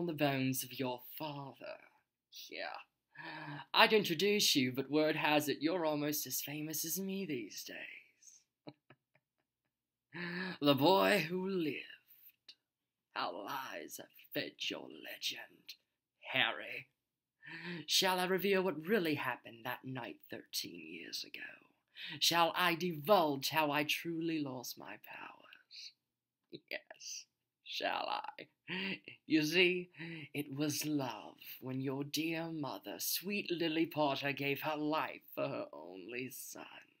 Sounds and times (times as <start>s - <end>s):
Narration, monologue: 0.0s - 8.7s, 9.7s - 37.0s.